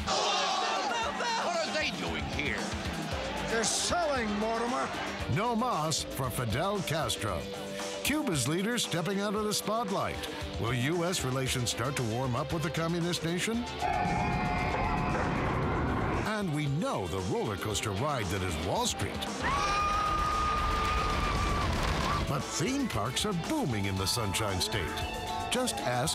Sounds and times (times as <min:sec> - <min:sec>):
Music: 0:00.0 - 0:26.1
Speech: 0:03.5 - 0:13.6, 0:16.3 - 0:19.3, 0:22.3 - 0:25.0, 0:25.6 - 0:26.1.